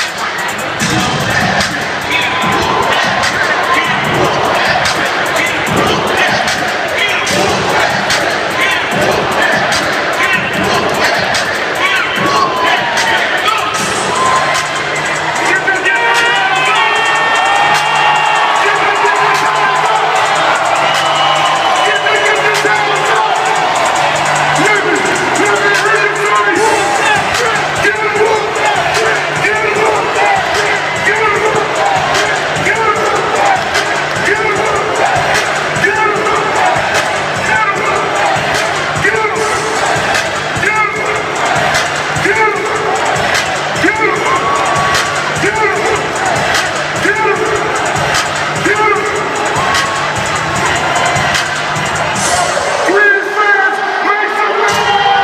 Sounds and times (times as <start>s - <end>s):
Speech: 0.0s - 17.1s, 18.4s - 20.4s, 21.7s - 23.6s, 24.6s - 41.6s, 42.2s - 47.9s, 48.6s - 49.7s, 52.8s - 55.2s
Music: 0.0s - 55.2s.